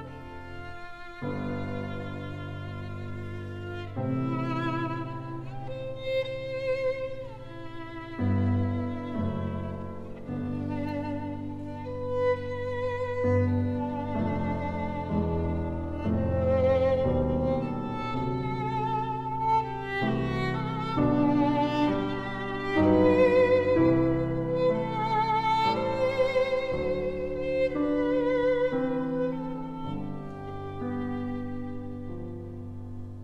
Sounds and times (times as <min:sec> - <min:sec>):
Violin, fiddle: 0:00.0 - 0:33.2.